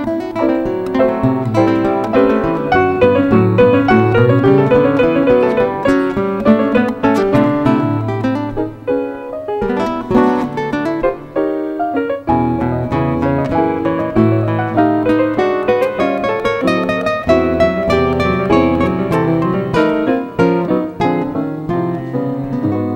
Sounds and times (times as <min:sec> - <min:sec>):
Guitar: 0:00.0 - 0:22.9.